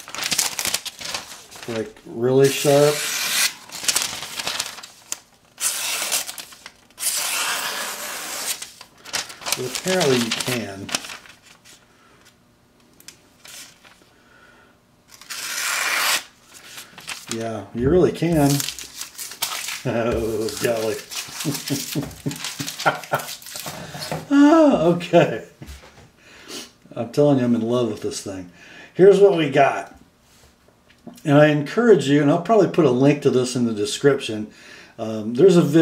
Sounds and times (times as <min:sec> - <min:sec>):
Inside, small room: 0:00.0 - 0:35.8
Speech: 0:01.7 - 0:03.0, 0:09.6 - 0:10.9, 0:17.4 - 0:18.7, 0:19.9 - 0:21.0, 0:24.3 - 0:25.6, 0:26.9 - 0:30.0, 0:31.1 - 0:35.8.